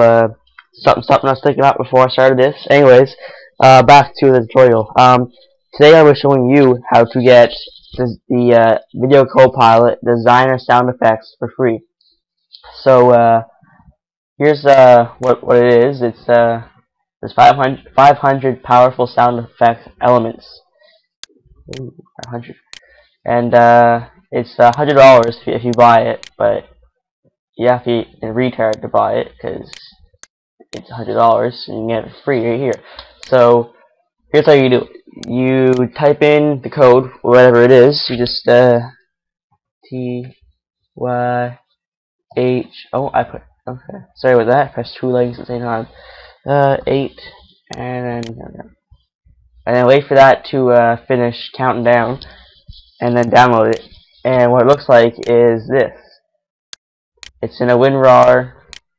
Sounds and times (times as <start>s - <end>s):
Speech: 0.0s - 11.8s, 12.6s - 13.6s, 14.4s - 20.6s, 21.7s - 26.7s, 27.6s - 30.0s, 30.7s - 33.7s, 34.4s - 39.0s, 39.9s - 40.4s, 41.0s - 41.6s, 42.4s - 48.7s, 49.7s - 56.2s, 57.4s - 58.6s.